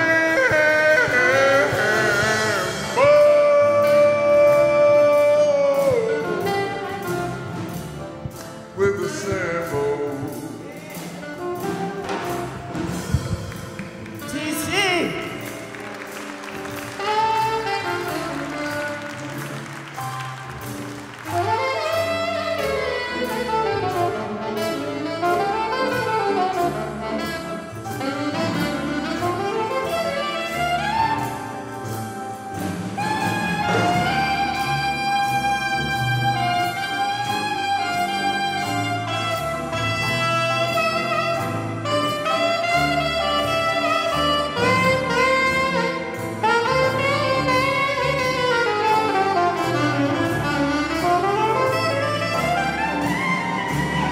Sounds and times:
Jazz: 0:00.0 - 0:54.1
Musical instrument: 0:00.0 - 0:54.1.

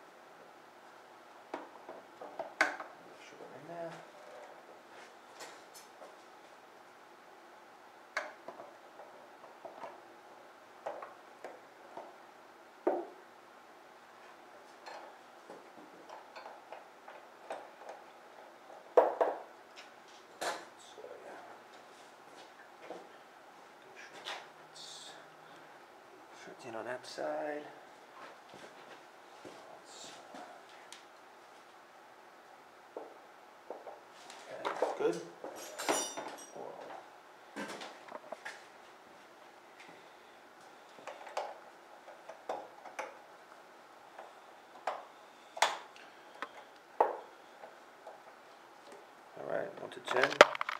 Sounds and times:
Speech: 0:03.2 - 0:04.6, 0:20.8 - 0:21.6, 0:26.4 - 0:27.8, 0:34.4 - 0:35.4, 0:49.4 - 0:50.4.

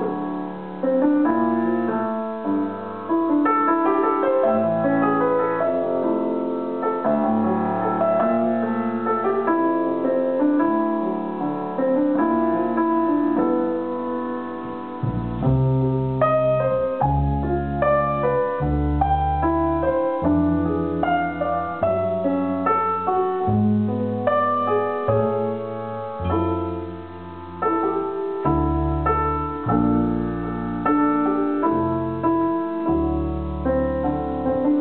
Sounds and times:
Music: 0:00.0 - 0:34.8.

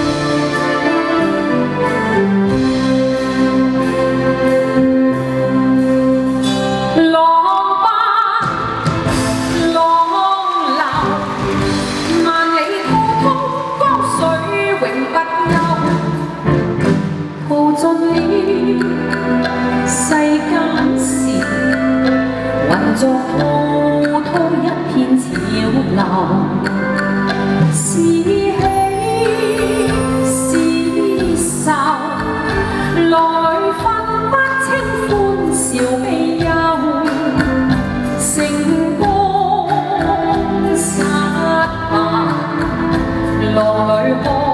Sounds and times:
Music of Asia: 0:00.0 - 0:44.5.

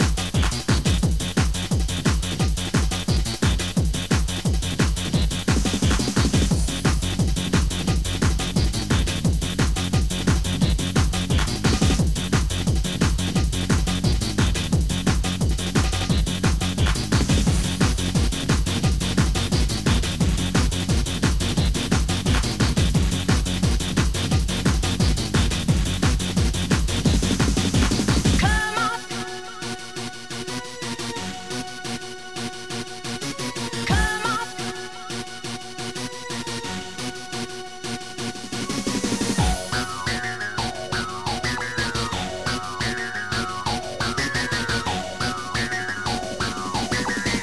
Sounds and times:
Music: 0:00.0 - 0:47.4.

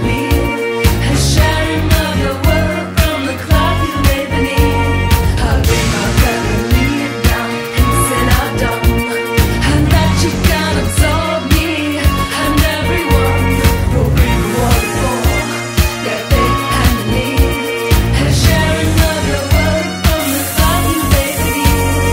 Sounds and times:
Electronic dance music: 0:00.0 - 0:22.1.

